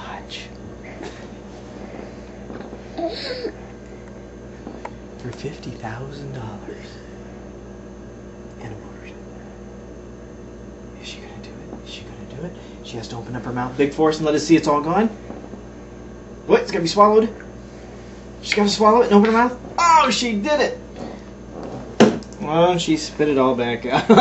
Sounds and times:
Speech: 5.2 - 7.0, 8.6 - 9.2, 11.0 - 15.2, 16.5 - 17.4, 18.4 - 20.8, 22.4 - 24.1.

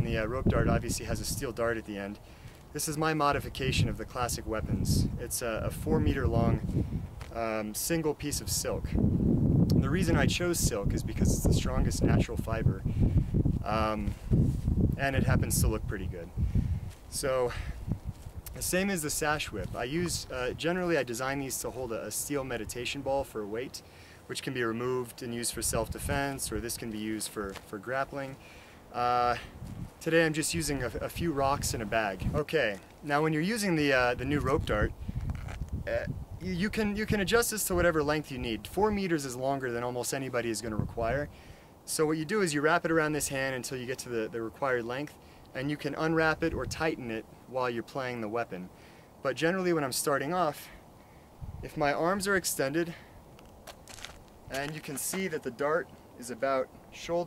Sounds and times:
Speech: 0.0 - 2.2, 2.8 - 6.6, 7.3 - 9.0, 9.7 - 12.8, 13.6 - 14.2, 15.0 - 16.3, 17.1 - 17.7, 18.5 - 35.0, 35.9 - 41.3, 41.9 - 50.8, 51.6 - 53.0, 54.5 - 57.2.

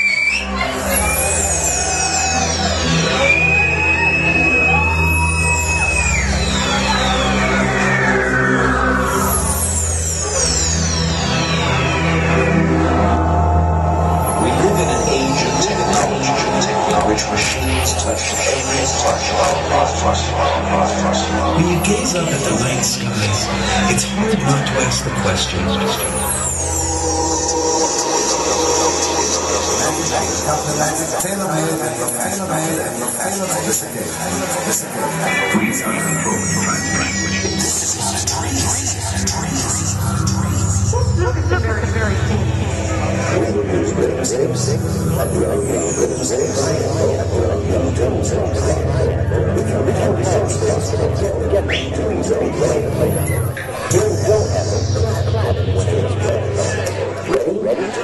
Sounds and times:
Music: 0.0 - 58.0
Speech: 14.4 - 26.3, 27.9 - 58.0.

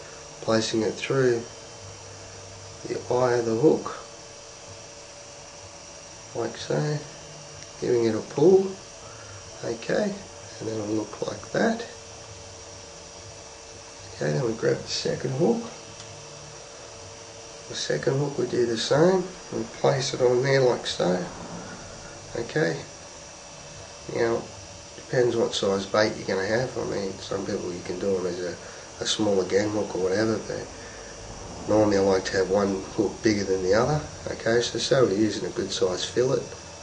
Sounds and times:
Inside, small room: 0.0 - 36.8
Speech: 0.4 - 1.5, 2.8 - 4.1, 6.3 - 7.2, 7.8 - 8.8, 9.6 - 12.0, 14.0 - 15.8, 17.7 - 21.4, 22.3 - 22.9, 24.1 - 30.8, 31.7 - 36.6.

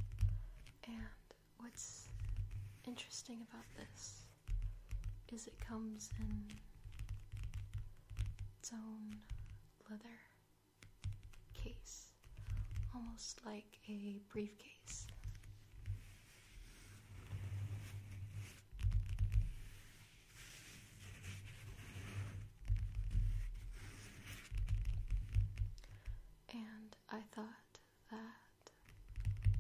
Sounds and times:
Speech: 5.3 - 6.6, 12.9 - 15.1.

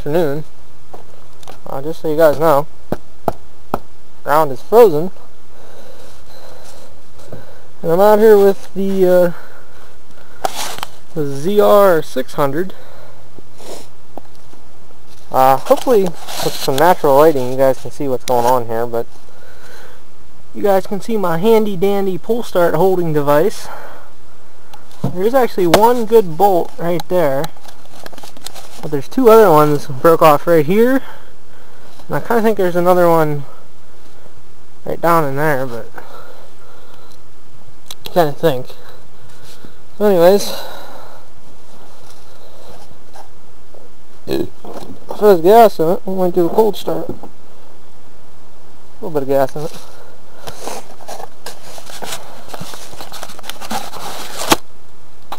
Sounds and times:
Speech: 0.0 - 0.5, 1.6 - 2.7, 4.2 - 5.2, 7.8 - 9.4, 11.2 - 12.8, 15.3 - 19.1, 20.6 - 23.7, 25.0 - 27.5, 28.8 - 31.1, 32.1 - 33.5, 34.8 - 36.0, 38.1 - 38.8, 40.0 - 40.7, 44.3 - 47.2, 49.0 - 49.8.

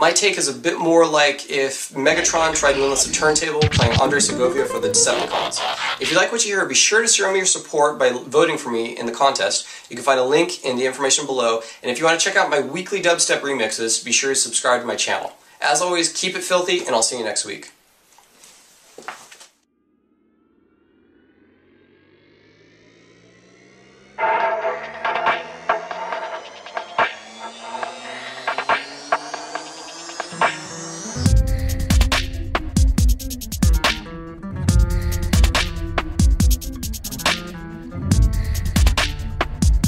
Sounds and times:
Speech: 0.0 - 17.8.

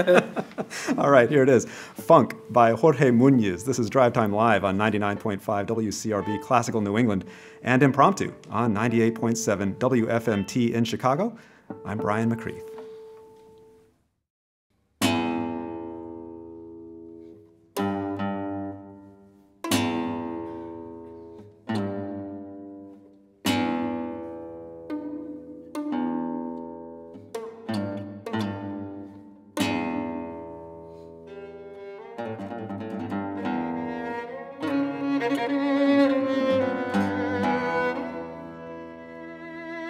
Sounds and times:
Speech: 1.0 - 12.7.

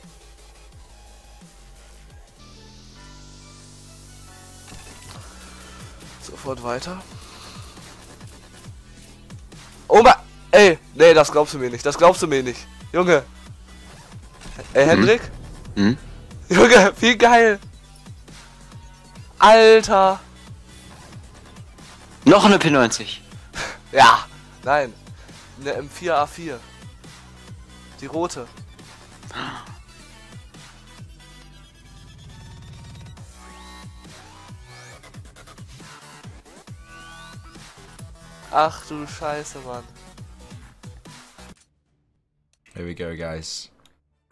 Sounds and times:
Music: 0.0 - 44.3
Speech: 6.2 - 7.0, 9.9 - 13.3, 14.7 - 17.6, 19.4 - 20.2, 22.3 - 23.2, 23.9 - 24.9, 25.6 - 26.6, 28.0 - 28.5, 38.5 - 39.9, 42.7 - 43.8.

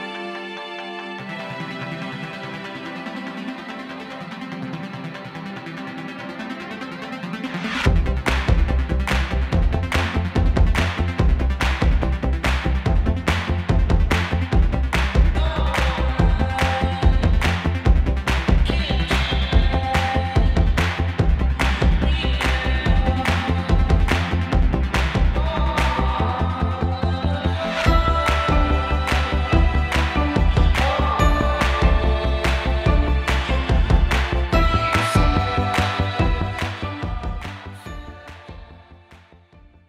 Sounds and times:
Music: 0.0 - 39.8.

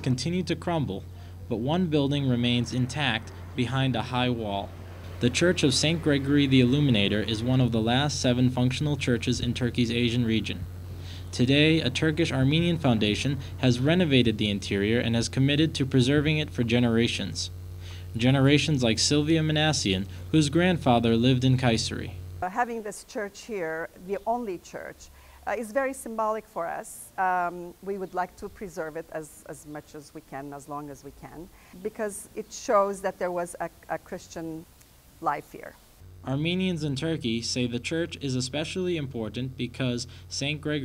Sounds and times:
Speech: 0.0 - 10.7, 11.3 - 17.6, 18.2 - 40.8.

